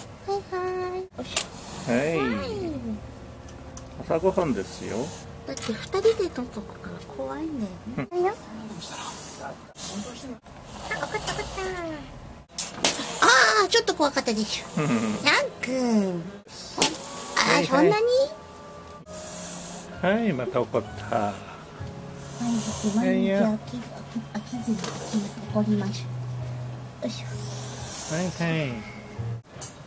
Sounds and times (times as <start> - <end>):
Hiss: 1.3 - 2.2, 8.9 - 11.6, 16.6 - 17.6, 19.1 - 20.0, 22.2 - 23.0, 27.3 - 28.6.